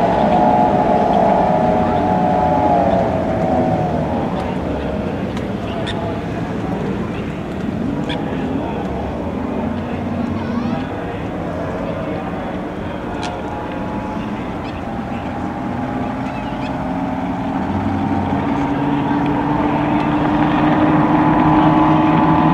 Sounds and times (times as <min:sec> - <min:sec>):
Motorboat, speedboat: 0:00.0 - 0:22.5
Outside, urban or manmade: 0:00.0 - 0:22.5
Speech: 0:00.0 - 0:22.5.